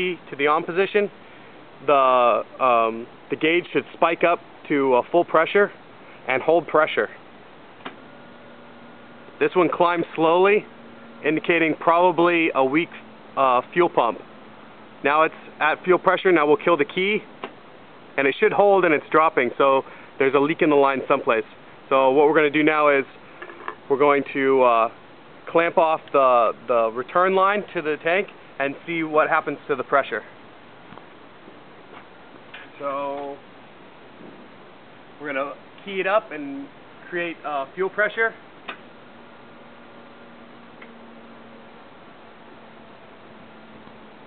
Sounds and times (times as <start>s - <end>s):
Speech: 0.0s - 1.1s, 1.8s - 7.2s, 9.4s - 14.2s, 15.0s - 17.3s, 18.2s - 23.2s, 23.9s - 30.4s, 32.7s - 33.4s, 35.2s - 38.4s.